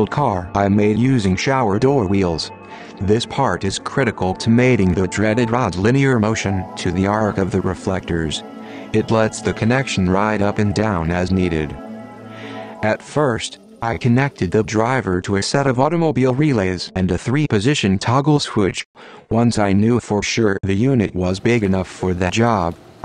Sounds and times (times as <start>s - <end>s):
Speech: 0.0s - 8.4s, 9.0s - 11.8s, 12.8s - 22.8s
Music: 0.0s - 18.2s.